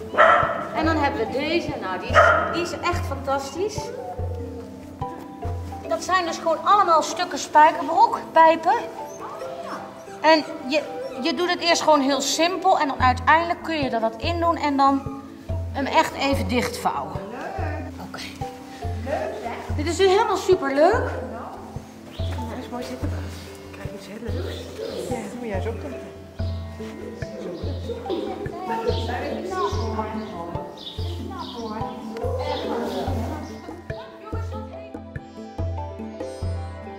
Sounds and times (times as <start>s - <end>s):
Music: 0.0s - 36.9s.